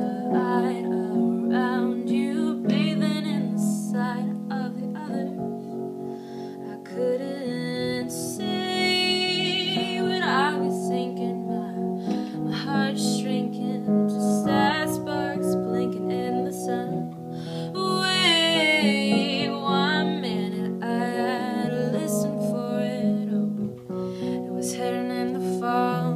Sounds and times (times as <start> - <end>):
Piano: 0.0 - 26.1.